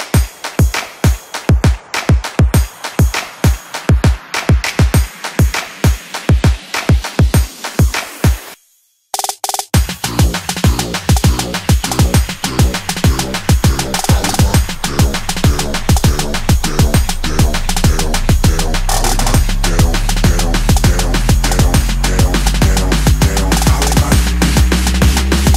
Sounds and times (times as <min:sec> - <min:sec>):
Drum and bass: 0:00.0 - 0:08.6, 0:09.2 - 0:25.5.